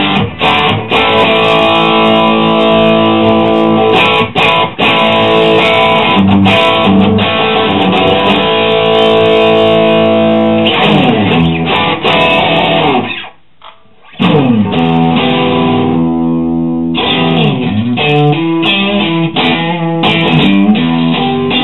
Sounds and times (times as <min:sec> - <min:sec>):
Music: 0:00.0 - 0:21.6.